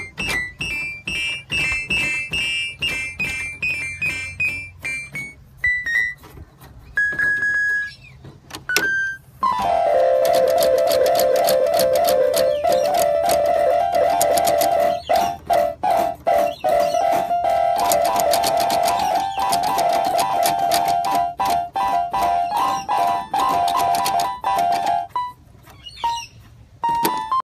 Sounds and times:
Music: 0.0 - 6.2, 8.8 - 25.4, 26.8 - 27.4.

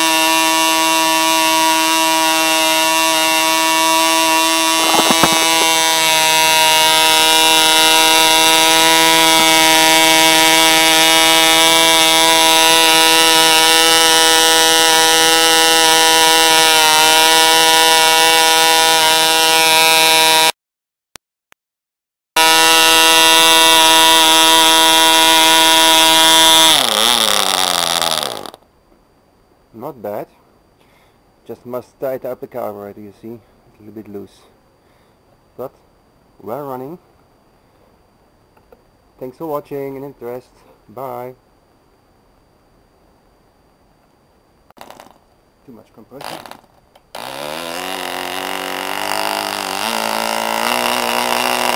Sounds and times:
Electric shaver, electric razor: 0.0 - 20.5, 22.4 - 28.4, 47.2 - 51.7.

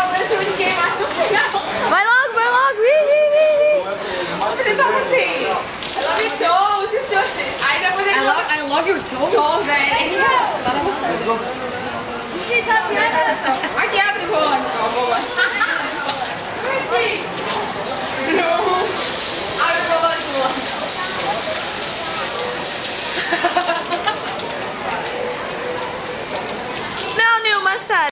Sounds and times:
Stream: 0.0 - 28.1.

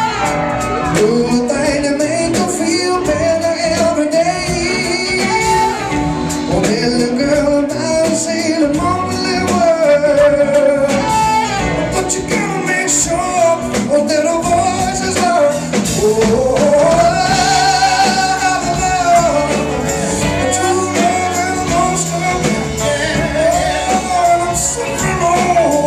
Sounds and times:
Music: 0.0 - 25.8
Male singing: 0.8 - 25.8.

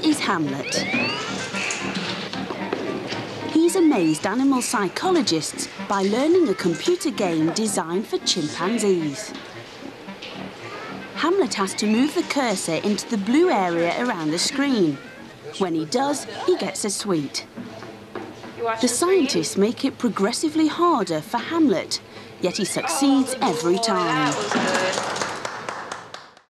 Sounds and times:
Speech: 0.0 - 0.9, 3.6 - 9.4, 11.2 - 17.5, 18.6 - 25.0.

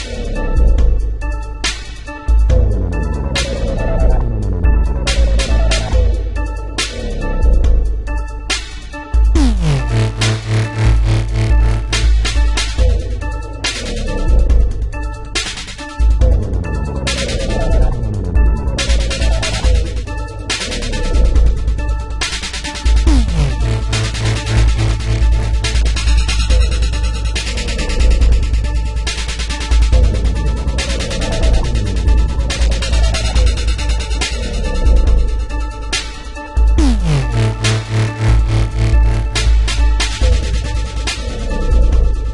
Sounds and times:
Dubstep: 0.0 - 42.3.

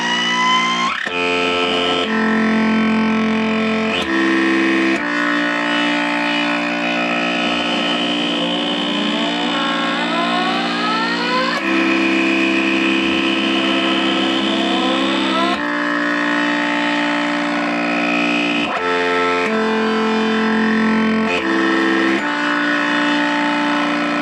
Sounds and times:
Guitar: 0.0 - 24.2.

